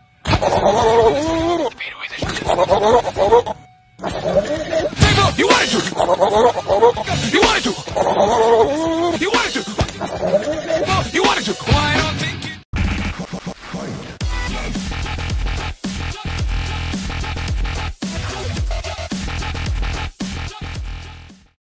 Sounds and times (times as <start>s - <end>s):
Music: 0.0s - 21.6s.